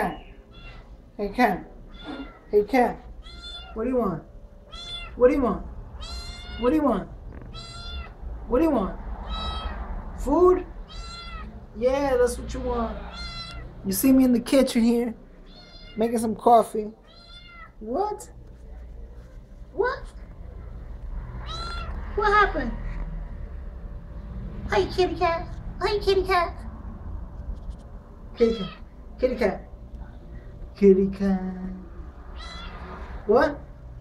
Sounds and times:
Meow: 0.5s - 0.9s, 1.9s - 2.5s, 3.2s - 3.8s, 4.7s - 5.2s, 6.0s - 6.7s, 7.5s - 8.2s, 9.2s - 9.8s, 10.9s - 11.5s, 13.1s - 13.7s, 15.4s - 16.0s, 17.0s - 17.8s, 21.4s - 22.0s, 28.4s - 28.9s, 32.4s - 32.9s
Speech: 1.2s - 1.7s, 2.5s - 3.0s, 8.5s - 9.0s, 10.2s - 10.7s, 11.7s - 13.2s, 13.8s - 15.2s, 16.0s - 17.0s, 17.8s - 20.2s, 22.2s - 22.9s, 24.7s - 26.6s, 30.8s - 31.9s, 33.3s - 33.6s.

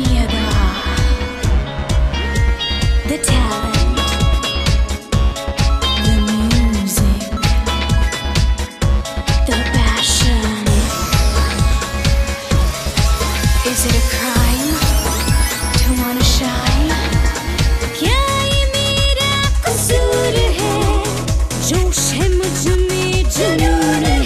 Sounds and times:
Music: 0.0s - 24.2s.

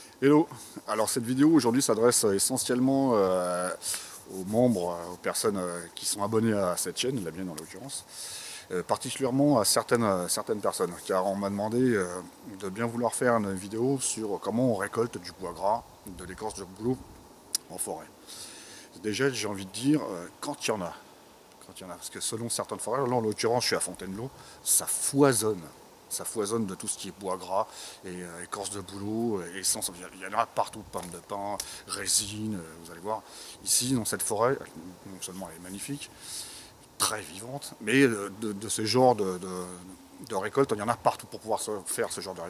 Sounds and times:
Speech: 0.2s - 8.1s, 8.7s - 17.0s, 17.6s - 18.1s, 19.0s - 21.0s, 21.6s - 36.1s, 37.0s - 42.4s.

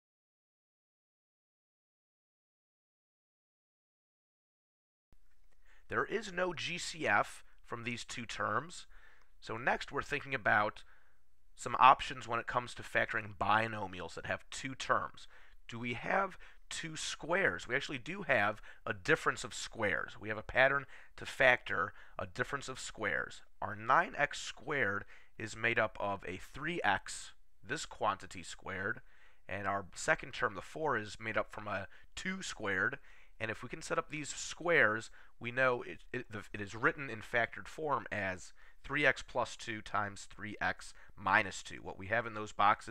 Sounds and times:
Speech: 5.9s - 10.9s, 11.6s - 42.9s.

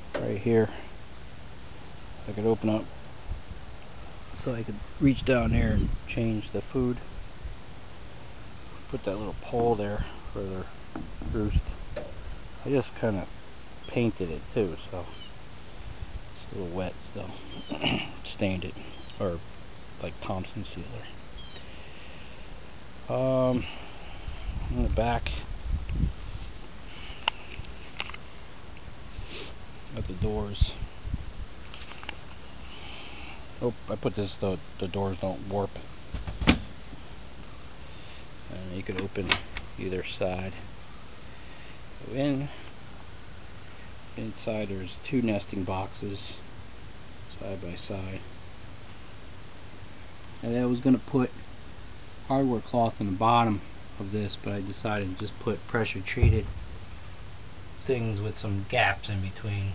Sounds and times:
Speech: 0.2s - 0.9s, 2.2s - 2.9s, 4.4s - 7.1s, 8.9s - 11.8s, 12.6s - 13.3s, 13.9s - 15.2s, 16.4s - 19.4s, 20.0s - 21.2s, 23.1s - 23.7s, 24.7s - 25.5s, 29.9s - 30.9s, 33.6s - 35.9s, 38.5s - 40.7s, 42.0s - 42.6s, 44.2s - 46.4s, 47.3s - 48.3s, 50.4s - 51.4s, 52.3s - 56.5s, 57.8s - 59.7s.

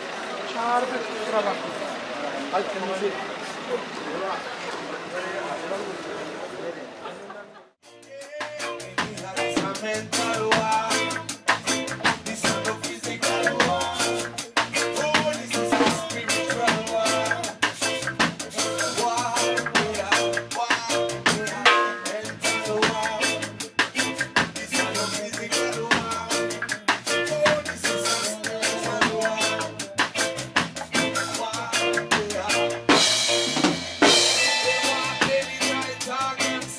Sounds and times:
Speech: 0.0s - 7.7s
Music: 7.8s - 36.7s.

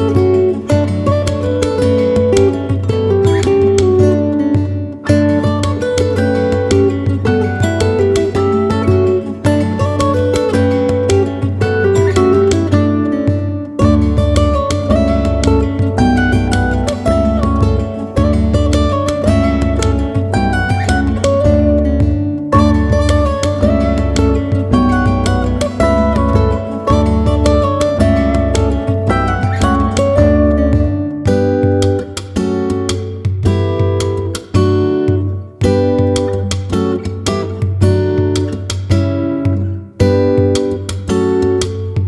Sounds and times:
Acoustic guitar: 0.0s - 42.0s
Strum: 0.0s - 42.0s.

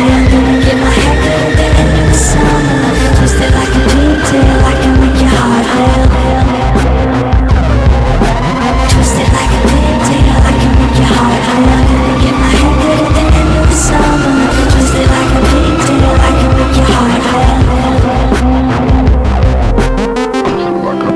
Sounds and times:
Music: 0.0s - 21.1s.

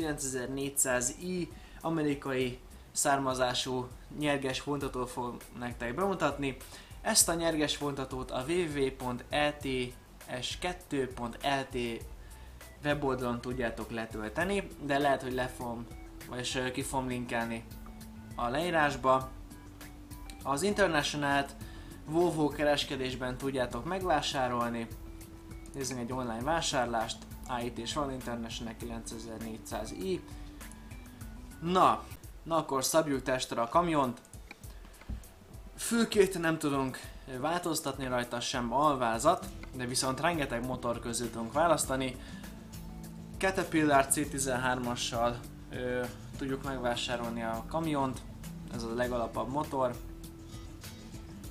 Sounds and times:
Speech: 0.0s - 12.1s, 12.8s - 17.7s, 18.4s - 19.3s, 20.4s - 24.9s, 25.8s - 30.2s, 31.6s - 34.2s, 35.8s - 42.2s, 43.4s - 50.0s
Music: 0.0s - 51.5s.

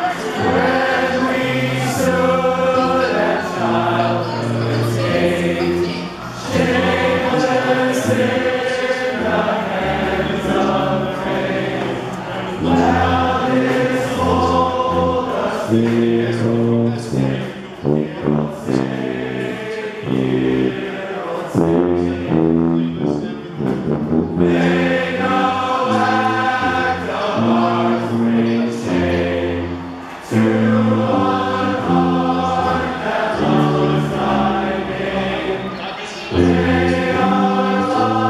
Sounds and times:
Male singing: 0.0s - 11.8s, 12.5s - 23.6s, 24.4s - 29.3s, 30.3s - 38.3s
Choir: 0.0s - 38.3s.

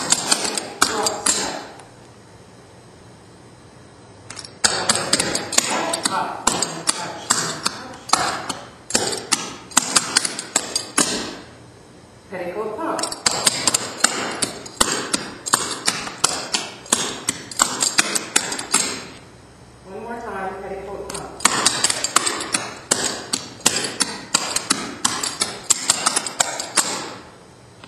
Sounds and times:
Speech: 5.7s - 8.1s, 12.3s - 13.1s, 19.9s - 21.4s.

